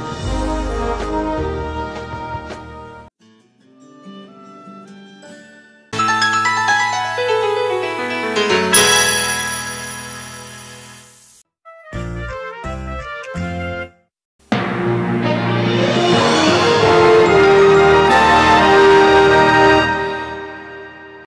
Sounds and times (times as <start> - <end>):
Music: 0.0 - 21.2.